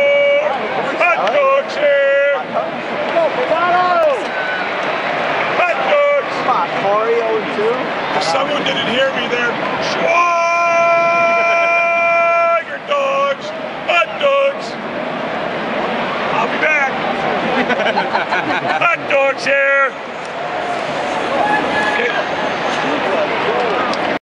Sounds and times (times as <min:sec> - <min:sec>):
Speech: 0:00.0 - 0:04.2, 0:05.6 - 0:14.8, 0:16.3 - 0:17.0, 0:18.8 - 0:20.0.